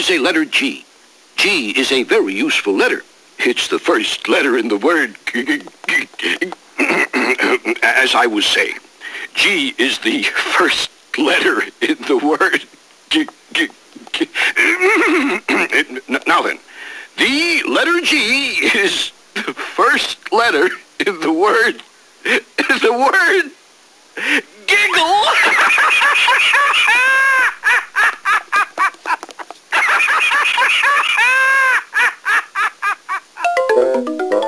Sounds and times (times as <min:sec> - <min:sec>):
Speech: 0:00.0 - 0:14.8, 0:15.4 - 0:16.6, 0:17.2 - 0:23.6, 0:24.5 - 0:25.5.